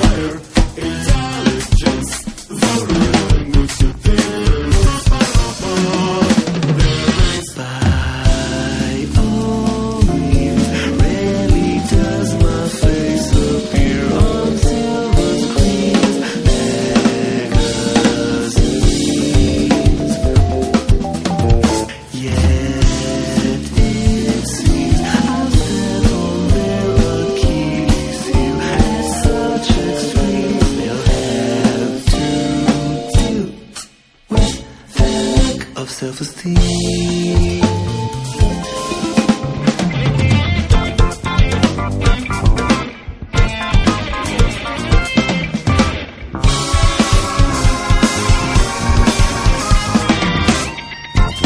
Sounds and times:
Drum: 0.0s - 35.8s, 36.6s - 51.4s
Drum kit: 0.0s - 35.9s, 36.5s - 51.4s.

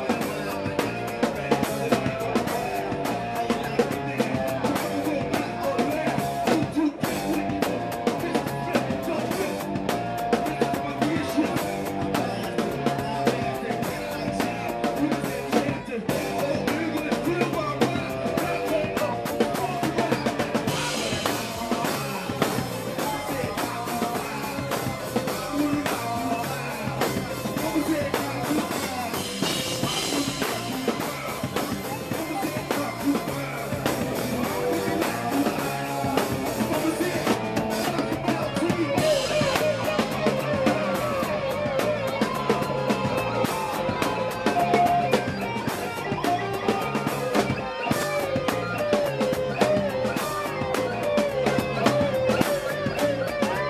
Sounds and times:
Bass guitar: 0.0s - 53.7s
Electric guitar: 0.0s - 53.7s.

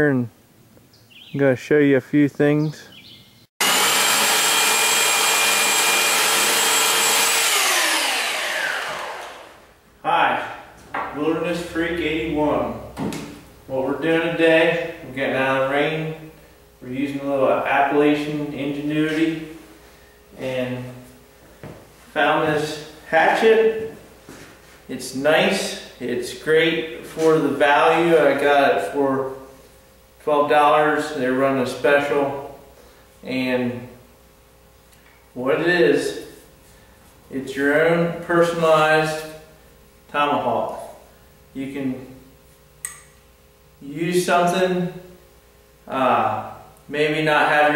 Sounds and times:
Speech: 0.0s - 0.3s, 1.3s - 2.9s, 10.0s - 12.9s, 13.7s - 19.6s, 20.4s - 21.1s, 22.2s - 24.0s, 24.9s - 29.4s, 30.2s - 32.6s, 33.2s - 34.0s, 35.4s - 36.4s, 37.3s - 39.4s, 40.1s - 41.0s, 41.6s - 42.2s, 43.8s - 45.1s, 45.9s - 47.7s.

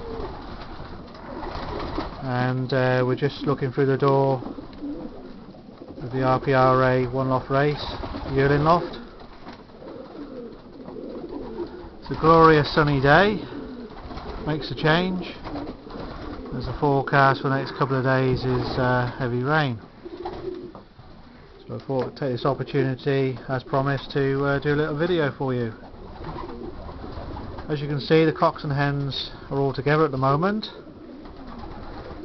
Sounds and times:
Coo: 0.0s - 21.8s, 25.2s - 29.5s, 30.4s - 32.2s.

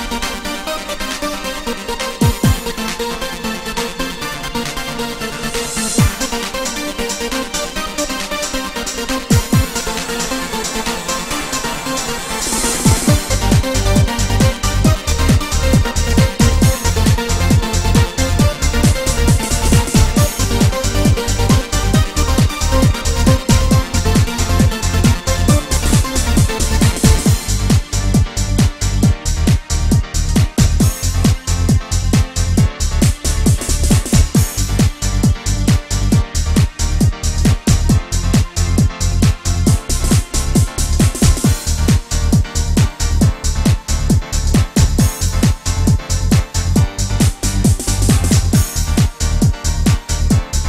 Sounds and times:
Music: 0.0s - 50.6s.

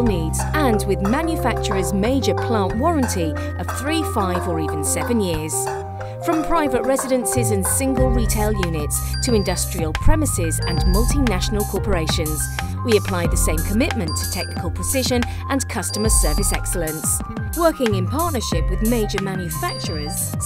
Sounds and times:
Music: 0.0s - 20.4s
Speech: 0.0s - 20.4s.

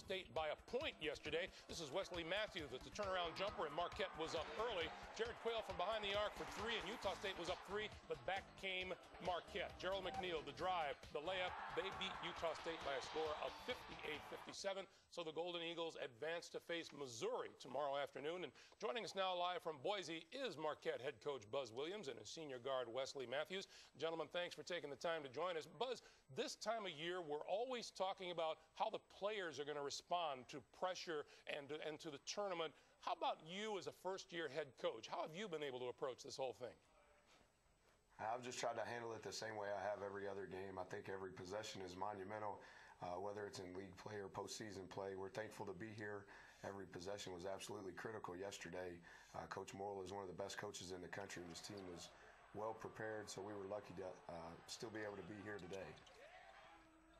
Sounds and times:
Speech: 0.0s - 36.8s, 38.2s - 56.1s.

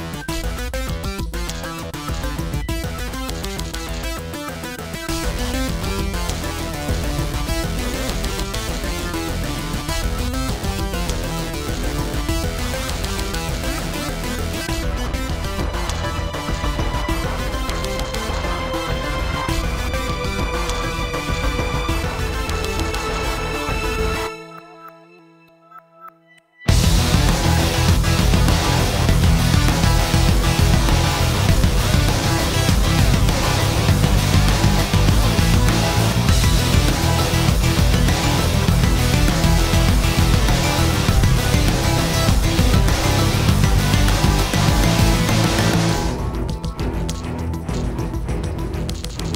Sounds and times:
Music: 0.0s - 49.3s.

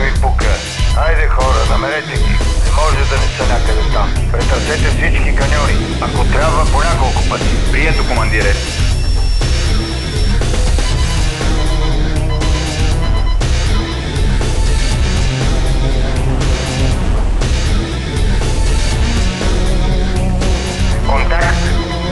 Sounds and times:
Speech: 0.0s - 8.6s, 21.0s - 21.8s
Music: 0.0s - 22.1s.

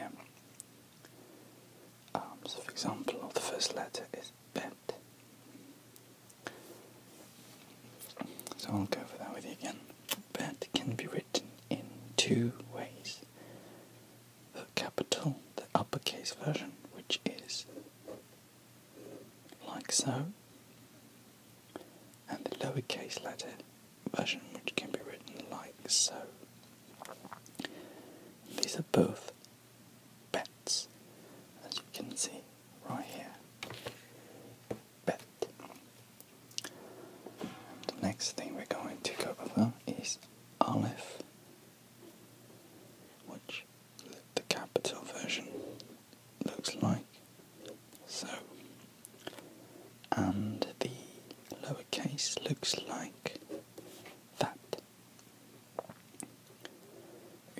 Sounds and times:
Whispering: 0.0s - 0.3s, 2.1s - 5.0s, 8.5s - 13.3s, 14.5s - 17.9s, 19.1s - 20.4s, 22.3s - 26.4s, 28.5s - 29.4s, 30.3s - 30.9s, 31.6s - 33.4s, 35.0s - 35.8s, 37.8s - 41.3s, 43.2s - 48.7s, 50.1s - 53.7s, 54.4s - 54.8s.

